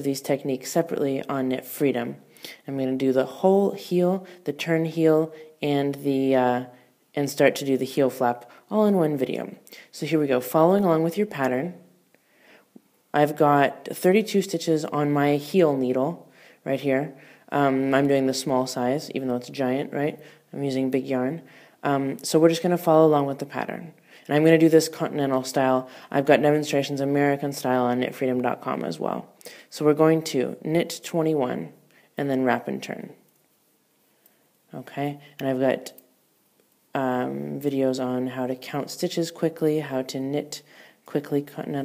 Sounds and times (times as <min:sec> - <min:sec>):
Speech: 0:00.0 - 0:11.9, 0:13.1 - 0:33.2, 0:34.7 - 0:36.1, 0:37.0 - 0:41.8.